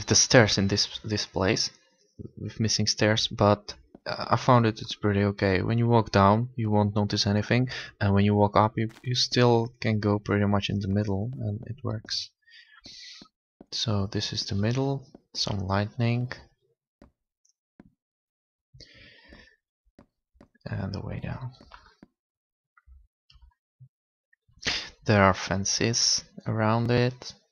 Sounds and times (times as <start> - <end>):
Speech: 0.0 - 12.3, 13.8 - 16.4, 20.7 - 21.6, 24.7 - 27.4.